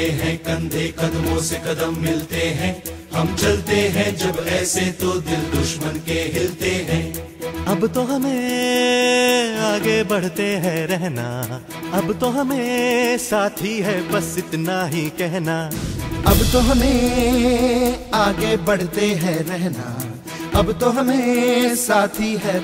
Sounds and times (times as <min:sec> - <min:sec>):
Music of Bollywood: 0:00.0 - 0:22.6.